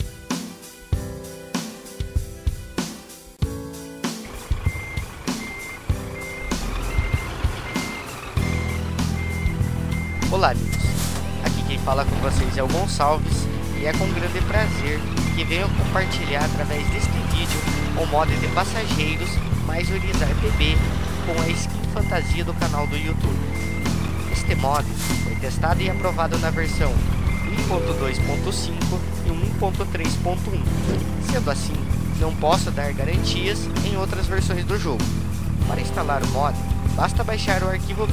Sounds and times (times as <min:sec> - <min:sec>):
Music: 0:00.0 - 0:38.1
Speech: 0:10.2 - 0:23.4, 0:24.4 - 0:38.1.